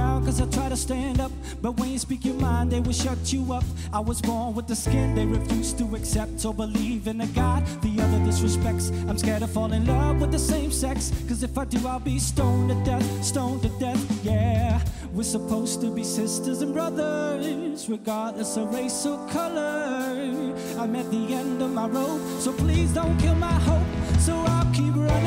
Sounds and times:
Music: 0.0s - 25.2s.

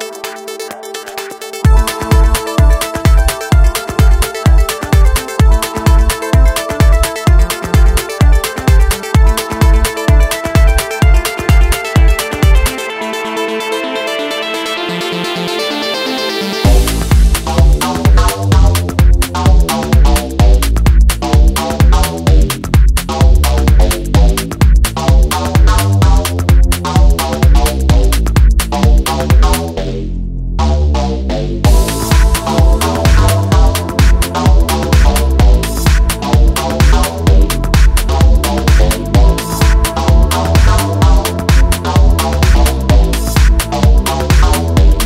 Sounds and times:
Music: 0.0s - 45.0s.

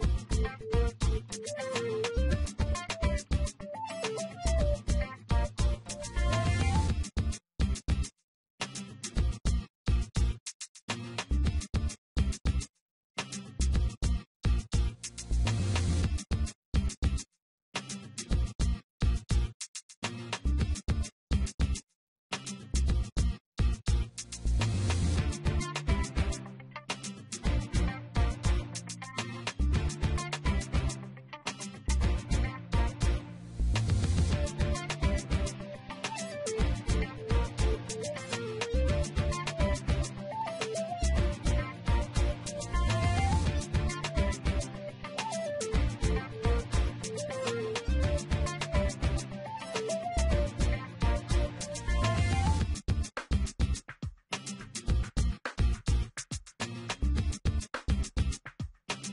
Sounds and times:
Music: 0.0s - 17.2s, 17.8s - 59.1s.

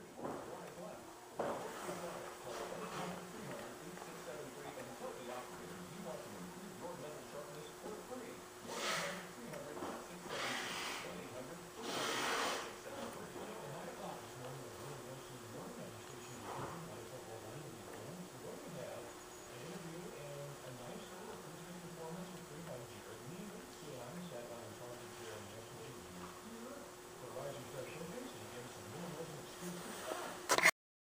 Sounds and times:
Speech: 0.0s - 30.4s.

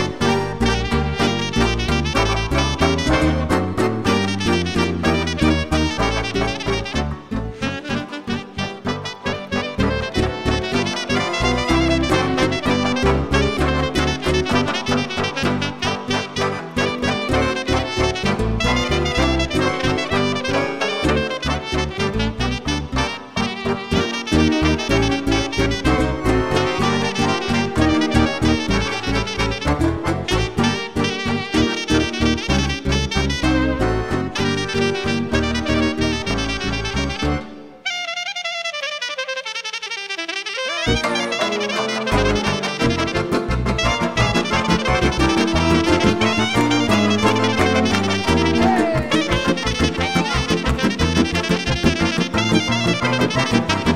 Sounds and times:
Orchestra: 0.0s - 38.0s, 40.6s - 53.9s
Classical music: 0.0s - 38.2s, 39.3s - 53.9s
Jazz: 0.0s - 53.9s.

